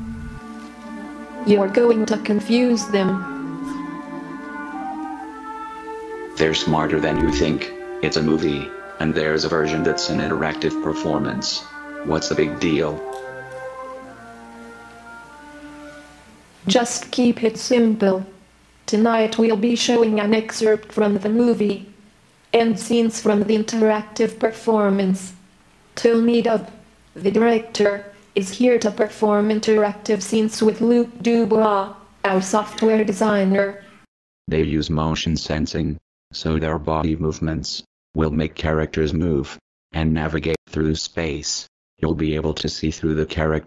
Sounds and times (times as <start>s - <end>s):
Music: 0.0s - 18.4s
Speech: 1.5s - 3.2s, 6.4s - 13.0s, 16.7s - 21.9s, 22.6s - 25.4s, 26.0s - 33.9s, 34.5s - 43.6s.